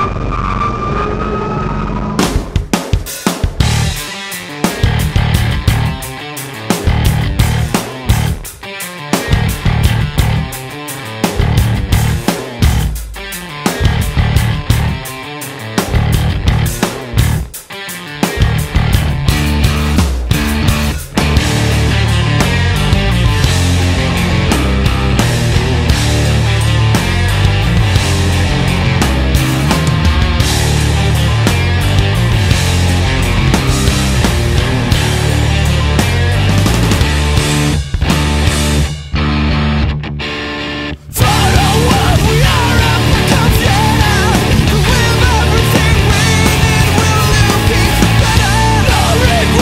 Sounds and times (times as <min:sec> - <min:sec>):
Music: 0:00.0 - 0:49.6.